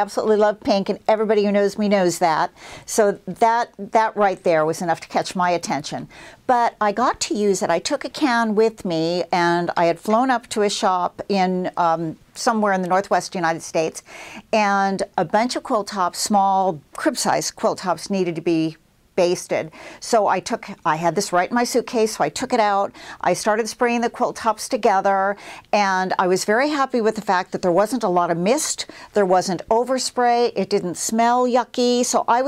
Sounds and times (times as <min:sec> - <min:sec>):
Speech: 0:00.0 - 0:32.4.